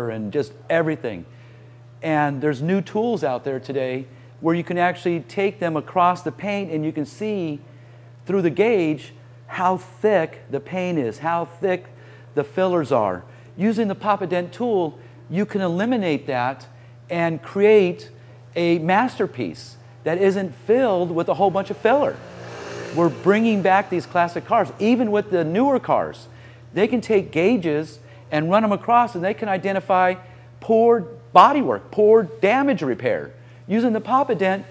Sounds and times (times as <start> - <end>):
Speech: 0.0 - 1.3, 2.0 - 7.6, 8.3 - 22.2, 23.0 - 34.7
Car: 21.6 - 25.4.